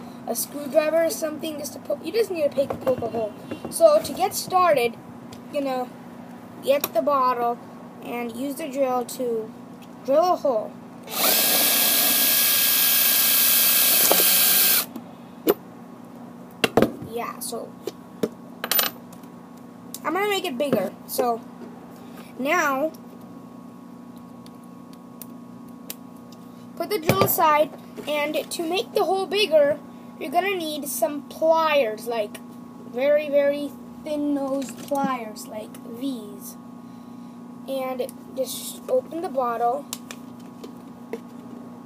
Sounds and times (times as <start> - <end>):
Drill: 11.1 - 14.9.